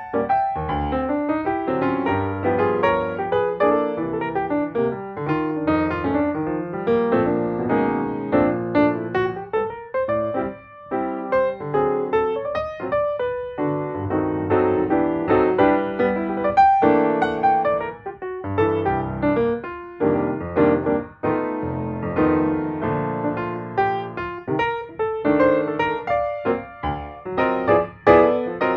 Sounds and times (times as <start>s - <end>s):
Music: 0.0s - 28.7s.